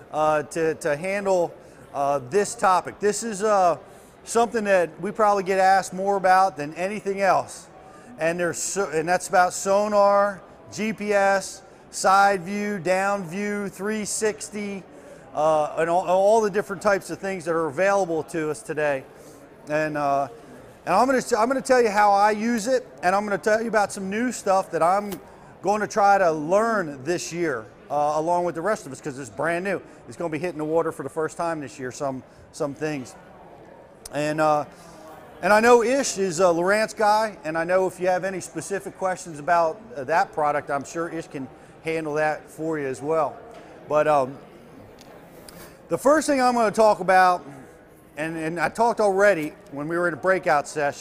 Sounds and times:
Speech: 0:00.0 - 0:51.0.

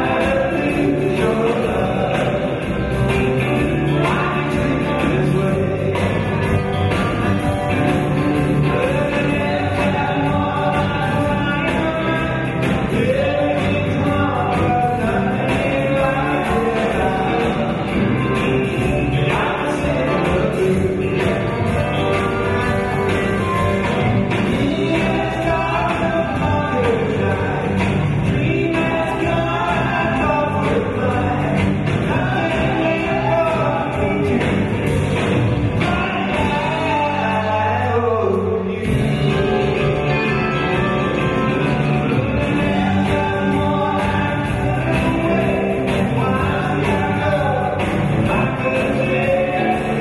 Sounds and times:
Male singing: 0:00.0 - 0:06.6, 0:08.5 - 0:21.4, 0:24.5 - 0:35.0, 0:35.8 - 0:39.9, 0:42.1 - 0:50.0
Music: 0:00.0 - 0:50.0.

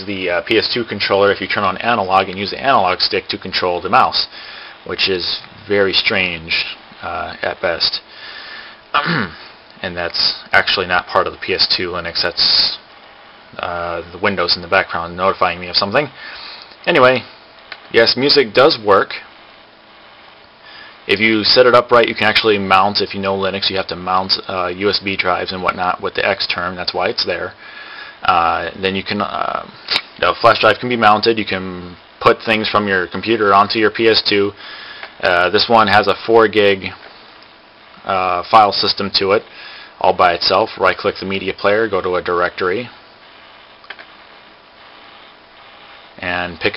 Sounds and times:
Speech: 0:00.0 - 0:08.1, 0:09.0 - 0:12.9, 0:13.6 - 0:16.2, 0:16.8 - 0:17.3, 0:17.9 - 0:19.3, 0:21.1 - 0:27.6, 0:28.2 - 0:34.6, 0:35.2 - 0:37.0, 0:38.0 - 0:43.0, 0:46.2 - 0:46.7
Inside, small room: 0:00.0 - 0:46.7.

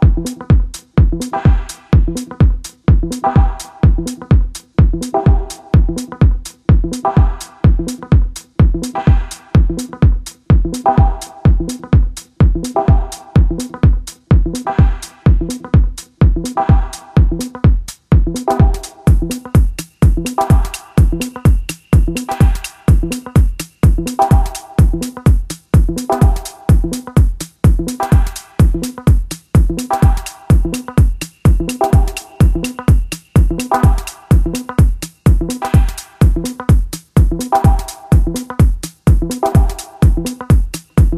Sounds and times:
Music: 0:00.0 - 0:41.1.

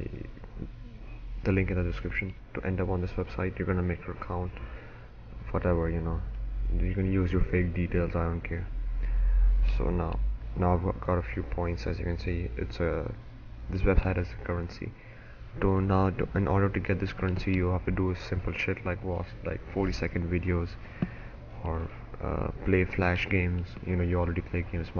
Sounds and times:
Speech: 0:00.0 - 0:00.7, 0:01.4 - 0:04.6, 0:05.4 - 0:08.8, 0:09.6 - 0:15.0, 0:15.6 - 0:20.8, 0:21.6 - 0:25.0.

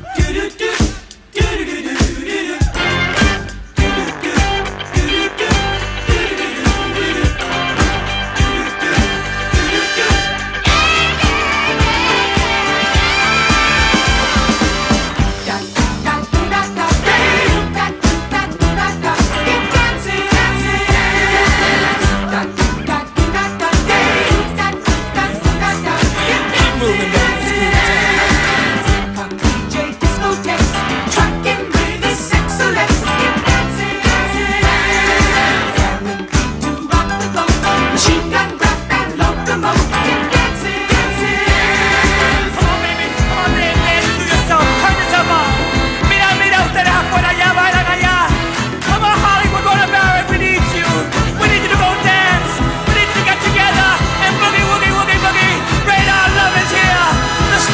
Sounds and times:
Music: 0:00.0 - 0:57.7.

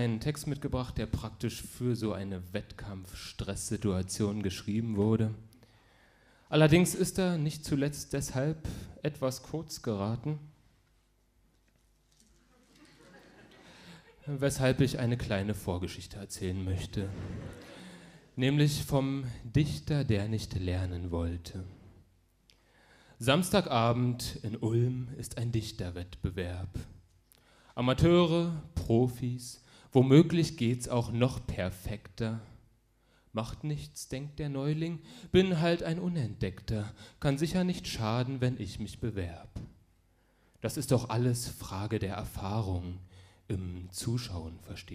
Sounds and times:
Speech: 0:00.0 - 0:05.5, 0:06.5 - 0:10.5, 0:14.2 - 0:17.4, 0:18.4 - 0:21.8, 0:23.2 - 0:27.0, 0:27.8 - 0:32.6, 0:33.4 - 0:39.7, 0:40.6 - 0:44.9.

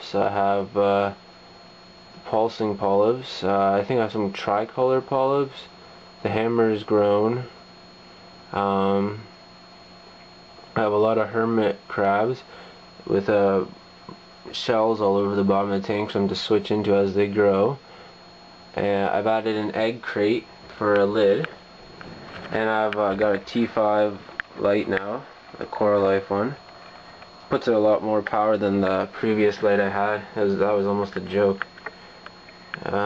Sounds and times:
Speech: 0:00.0 - 0:01.2, 0:02.2 - 0:07.6, 0:08.5 - 0:09.3, 0:10.8 - 0:17.8, 0:18.7 - 0:21.6, 0:22.5 - 0:26.6, 0:27.5 - 0:31.7, 0:32.8 - 0:33.0.

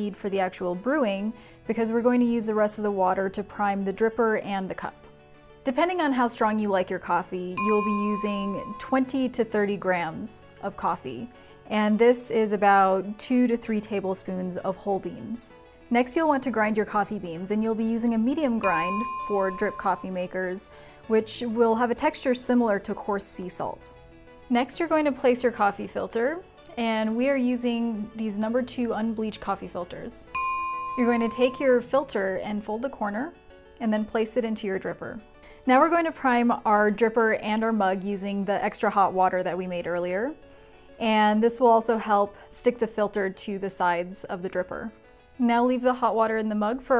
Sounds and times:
Speech: 0:00.0 - 0:05.0, 0:05.7 - 0:23.9, 0:24.5 - 0:30.3, 0:31.0 - 0:40.4, 0:41.0 - 0:46.9
Music: 0:00.0 - 0:46.9.

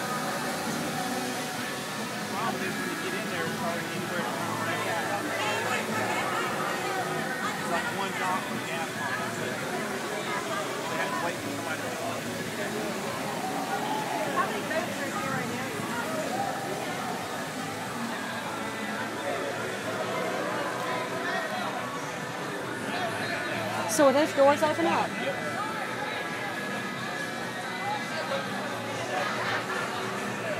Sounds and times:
Music: 0:00.0 - 0:30.5
Speech: 0:00.0 - 0:30.5.

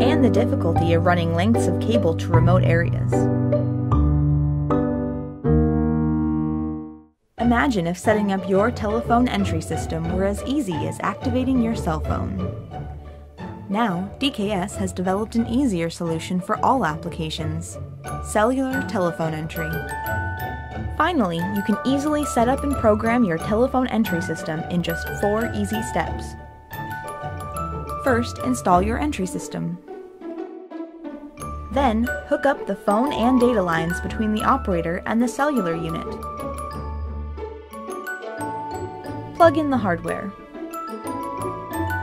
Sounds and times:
Speech: 0:00.0 - 0:03.3, 0:07.4 - 0:12.4, 0:13.7 - 0:19.9, 0:21.0 - 0:26.3, 0:28.1 - 0:29.8, 0:31.7 - 0:36.2, 0:39.4 - 0:40.4
Music: 0:00.0 - 0:42.0.

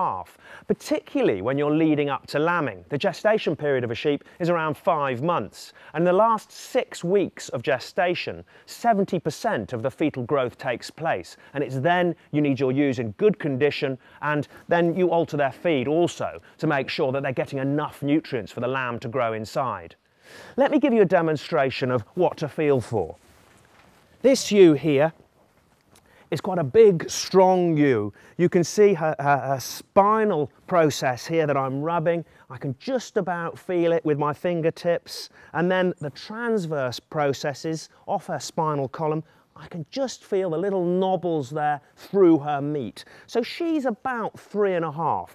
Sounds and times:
Speech: 0:00.0 - 0:20.0, 0:20.6 - 0:23.2, 0:24.2 - 0:25.2, 0:26.3 - 0:45.3.

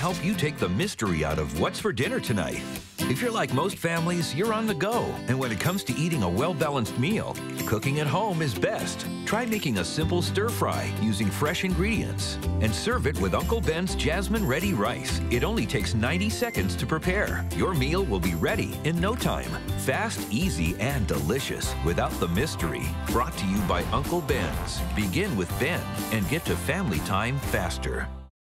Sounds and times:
Speech: 0:00.0 - 0:28.2
Music: 0:00.0 - 0:28.3.

